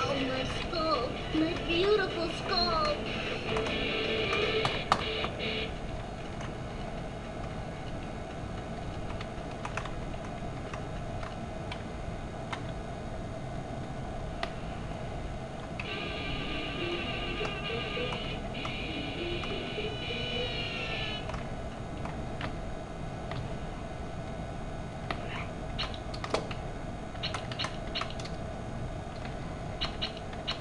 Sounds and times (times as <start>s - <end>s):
Music: 0.1s - 5.7s, 15.9s - 21.2s.